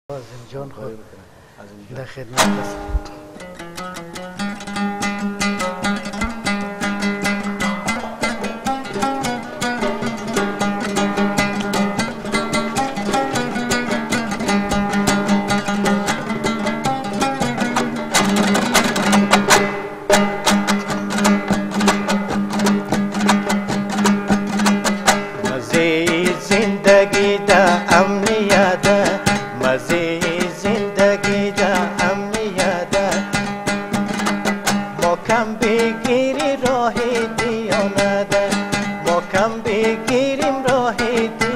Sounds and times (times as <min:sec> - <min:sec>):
Zither: 0:02.3 - 0:41.5.